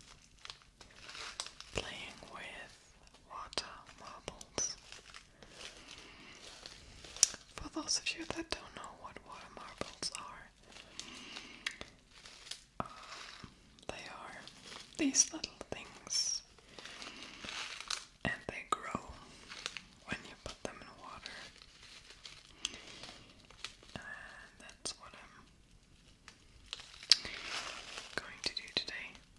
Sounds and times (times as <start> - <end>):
Speech: 15.0 - 16.4.